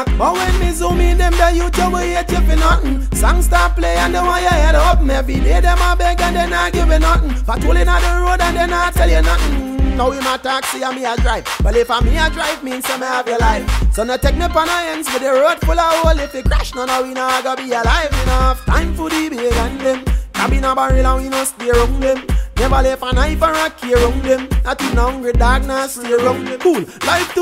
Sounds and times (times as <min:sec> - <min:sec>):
Music: 0:00.0 - 0:27.4.